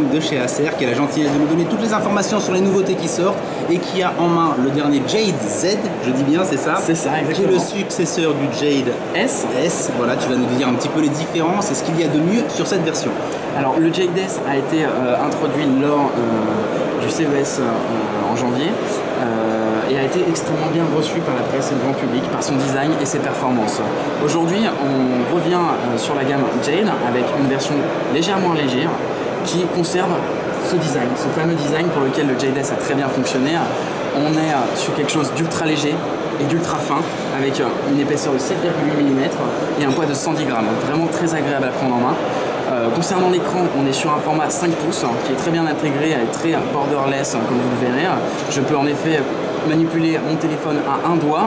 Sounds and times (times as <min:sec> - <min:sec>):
Speech: 0:00.0 - 0:51.4.